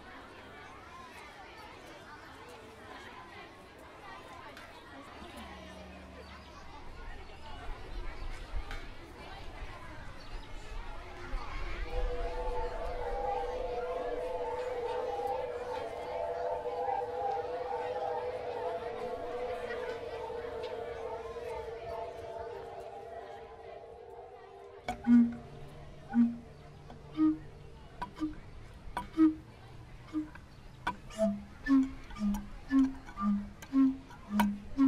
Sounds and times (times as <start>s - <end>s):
Crowd: 0.0s - 34.8s
Hubbub, speech noise, speech babble: 0.0s - 34.8s.